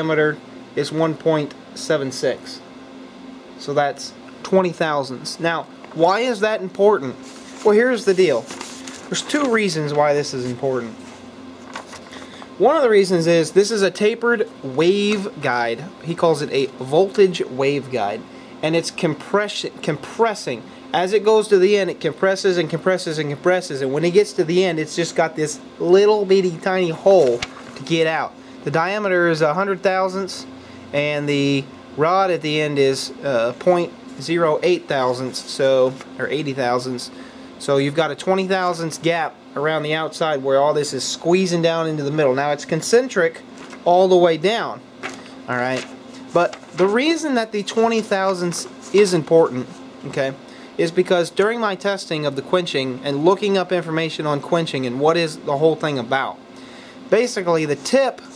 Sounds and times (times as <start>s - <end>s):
Speech: 0.0s - 2.7s, 3.6s - 8.5s, 9.1s - 11.0s, 12.6s - 44.8s, 45.5s - 56.4s, 57.1s - 58.3s.